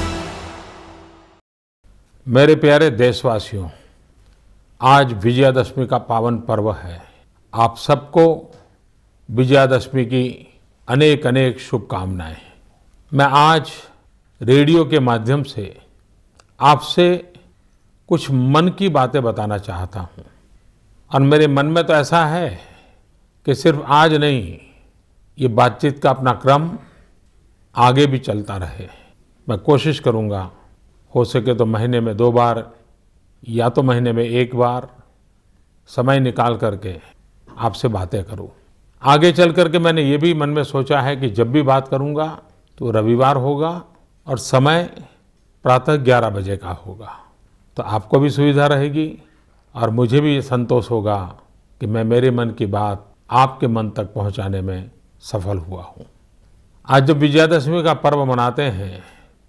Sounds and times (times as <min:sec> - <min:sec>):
Speech: 0:02.3 - 0:03.9, 0:04.8 - 0:08.7, 0:09.3 - 0:15.9, 0:16.6 - 0:17.5, 0:18.1 - 0:20.3, 0:21.1 - 0:22.8, 0:23.4 - 0:24.8, 0:25.4 - 0:27.0, 0:27.8 - 0:32.8, 0:33.4 - 0:35.0, 0:35.9 - 0:56.1, 0:56.9 - 0:59.2.